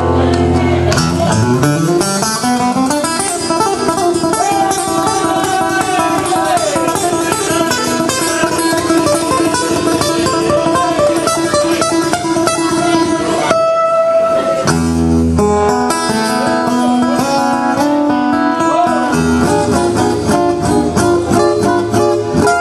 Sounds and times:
Strum: 0.0s - 22.6s
Speech: 4.3s - 9.2s, 18.4s - 19.4s.

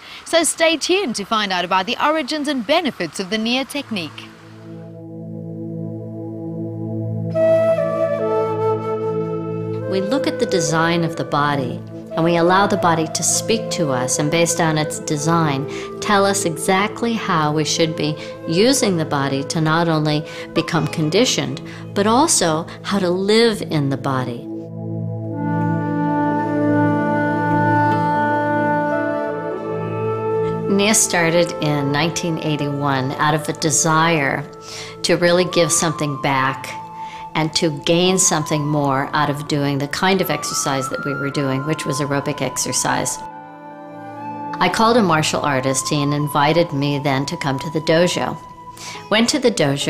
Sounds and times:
Speech: 0.3s - 4.3s, 9.9s - 24.5s, 30.7s - 36.8s, 37.4s - 43.3s, 44.6s - 48.4s, 49.0s - 49.8s
Music: 3.1s - 49.8s.

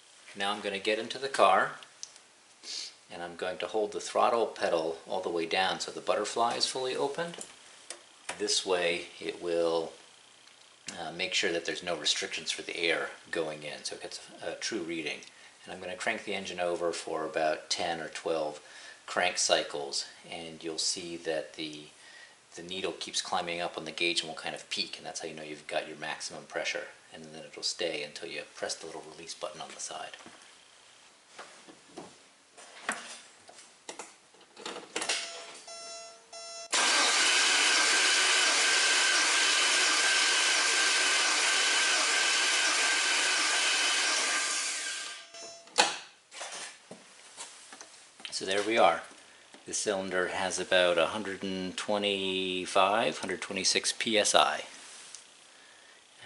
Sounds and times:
Speech: 0.4s - 1.8s, 3.1s - 7.5s, 8.3s - 10.0s, 10.9s - 22.0s, 22.6s - 30.2s, 48.3s - 49.1s, 49.7s - 54.7s.

